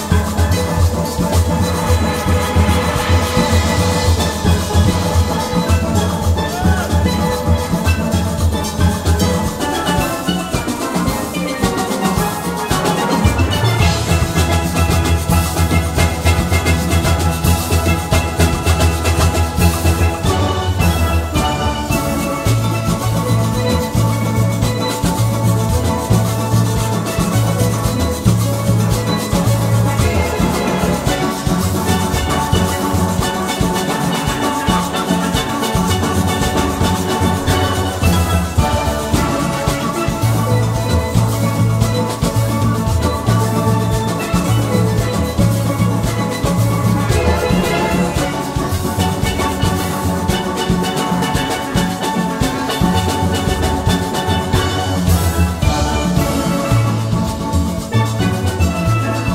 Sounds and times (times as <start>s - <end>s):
Steelpan: 0.0s - 59.3s.